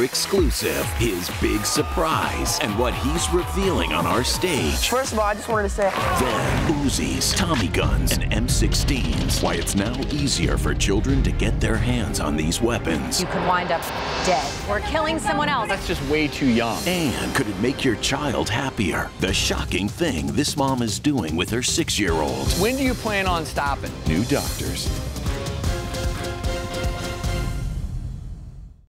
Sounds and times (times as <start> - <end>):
Speech: 0.0 - 24.9
Music: 0.0 - 28.9.